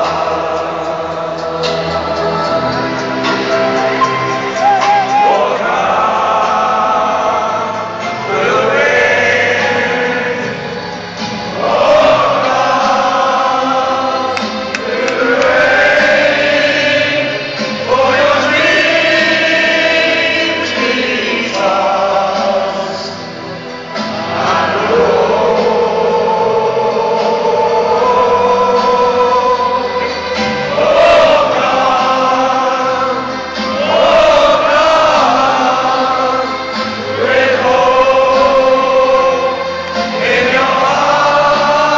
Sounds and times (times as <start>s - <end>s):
Music: 0.0s - 41.9s.